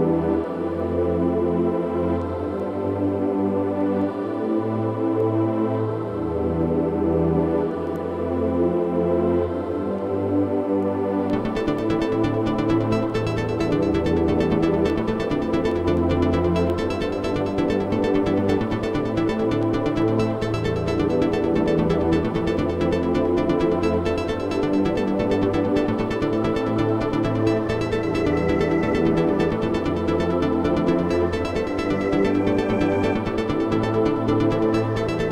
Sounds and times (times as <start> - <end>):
Music: 0.0 - 35.3.